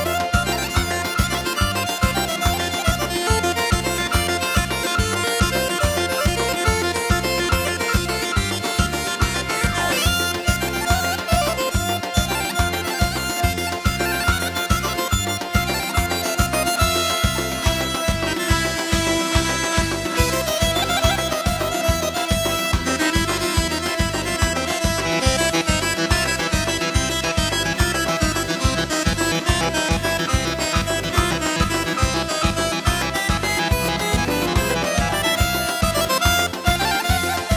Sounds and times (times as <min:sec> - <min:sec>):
Dance music: 0:00.0 - 0:37.5.